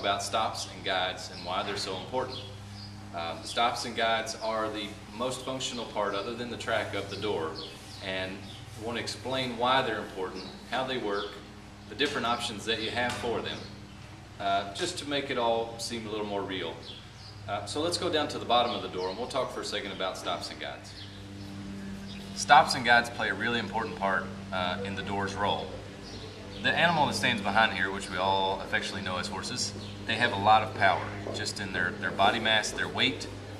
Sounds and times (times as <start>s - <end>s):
Speech: 0.0s - 2.5s, 3.2s - 13.7s, 14.4s - 16.9s, 17.5s - 21.0s, 22.4s - 25.8s, 26.6s - 33.4s.